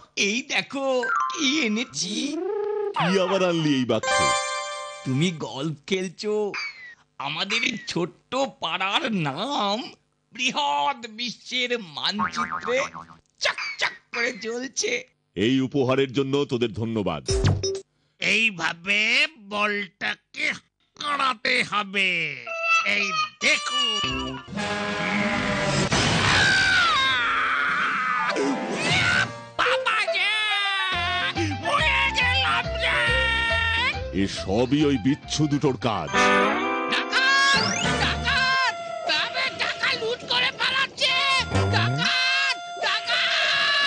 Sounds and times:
Speech: 7.2 - 17.3, 18.2 - 24.1, 34.2 - 36.3.

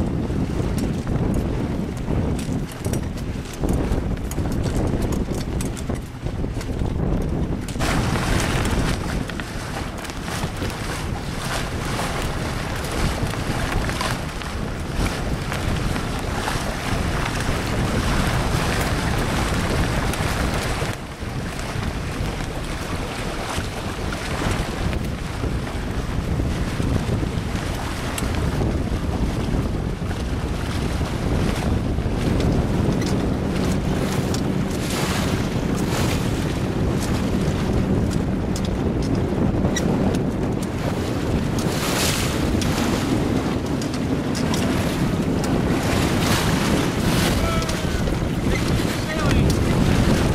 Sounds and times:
Sailboat, sailing ship: 0.0 - 50.3
Wind noise (microphone): 0.0 - 50.3.

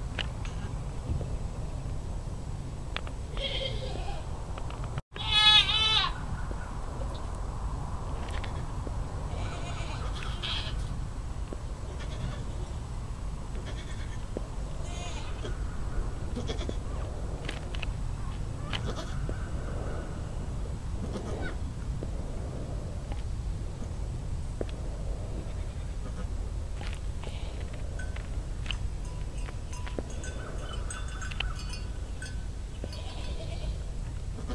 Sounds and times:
Bleat: 3.4 - 4.3, 5.2 - 6.2, 9.3 - 10.9, 11.9 - 12.7, 13.6 - 15.5, 16.4 - 16.8, 18.6 - 19.2, 21.1 - 21.6, 25.5 - 26.3, 27.2 - 27.6, 32.8 - 34.5.

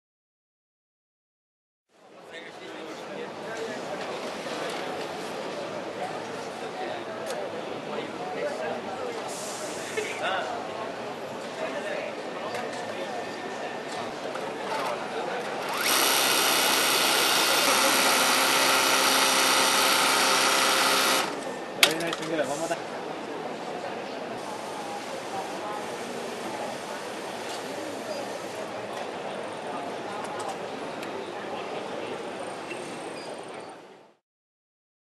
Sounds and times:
Speech: 2.0 - 15.6, 21.8 - 34.0
Sewing machine: 14.7 - 21.6.

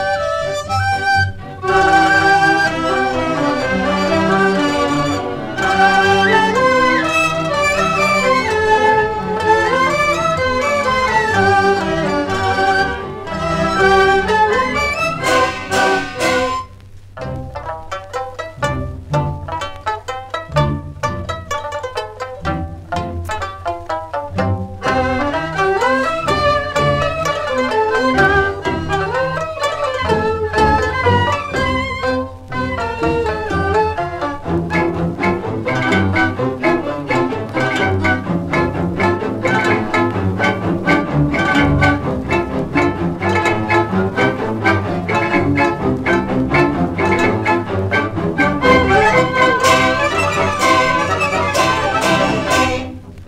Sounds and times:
Music: 0.0 - 53.2.

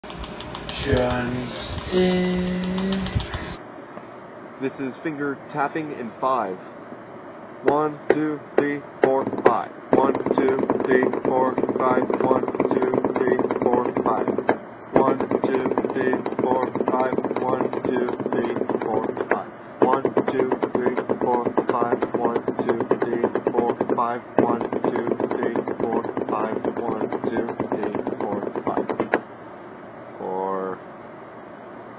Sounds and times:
Wood block: 9.0 - 29.2.

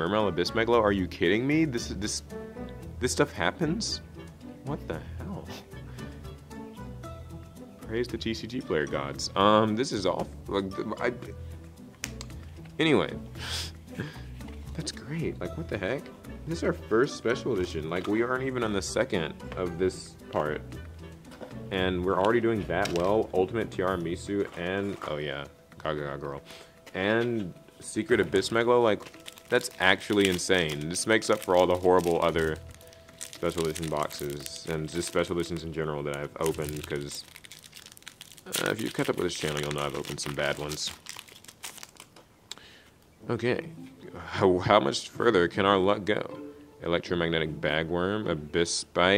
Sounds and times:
Speech: 0.0 - 2.3, 3.0 - 4.0, 4.7 - 5.6, 7.8 - 11.4, 12.8 - 13.2, 14.7 - 20.7, 21.7 - 32.6, 33.4 - 37.3, 38.5 - 41.0, 43.2 - 49.1
Inside, small room: 0.0 - 49.1.

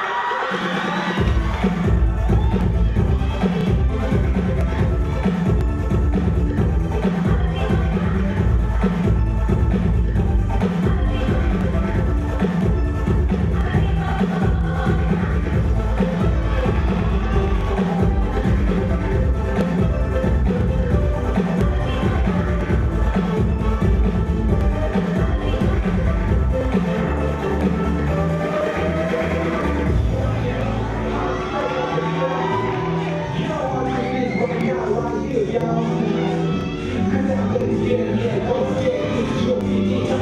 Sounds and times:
Music: 0.0 - 40.2.

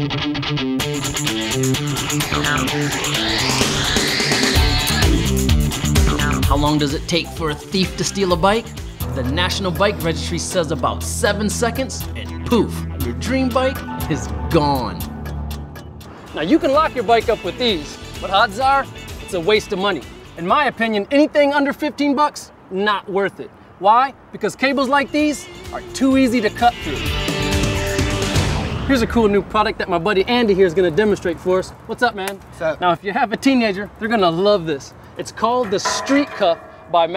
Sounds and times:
Music: 0.0 - 20.8, 25.0 - 29.1
Speech: 6.0 - 15.0, 16.4 - 27.1, 28.9 - 37.1.

